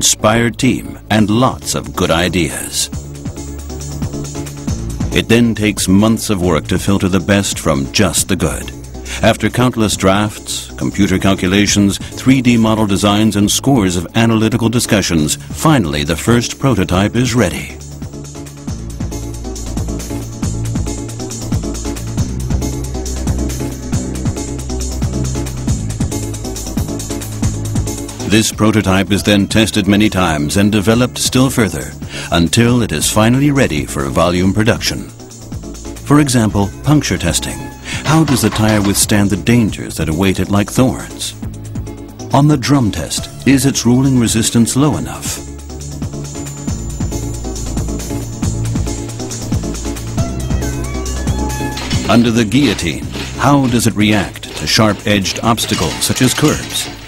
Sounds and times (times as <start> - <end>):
Speech: 0.0 - 3.0, 5.1 - 17.8, 28.2 - 35.2, 36.0 - 41.4, 42.3 - 45.5, 51.8 - 57.0
Music: 0.0 - 57.0.